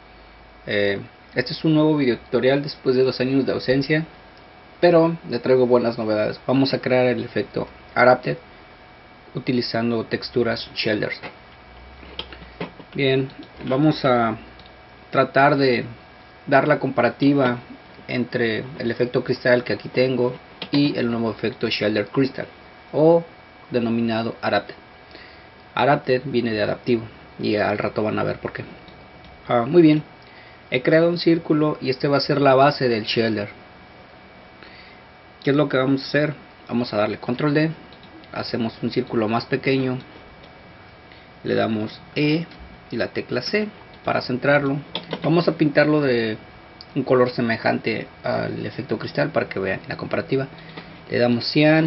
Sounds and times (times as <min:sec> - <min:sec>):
Speech: 0:00.6 - 0:04.1, 0:04.8 - 0:08.4, 0:09.3 - 0:11.4, 0:12.9 - 0:24.8, 0:25.8 - 0:28.8, 0:29.4 - 0:30.1, 0:30.7 - 0:33.6, 0:35.4 - 0:40.1, 0:41.4 - 0:50.5, 0:51.1 - 0:51.8.